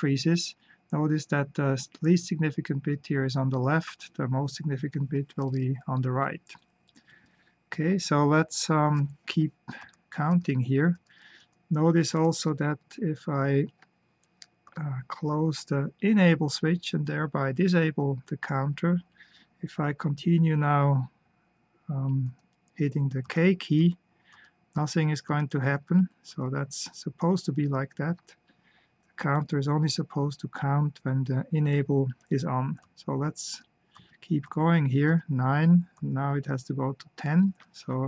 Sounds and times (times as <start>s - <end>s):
Speech: 0.0s - 6.6s, 7.7s - 11.1s, 11.7s - 13.8s, 14.7s - 21.2s, 21.9s - 24.0s, 24.8s - 28.4s, 29.2s - 38.0s.